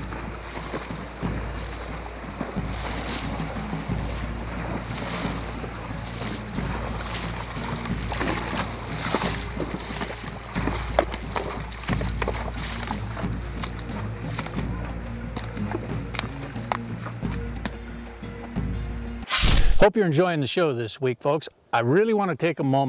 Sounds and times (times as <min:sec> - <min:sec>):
Music: 0:00.0 - 0:19.8.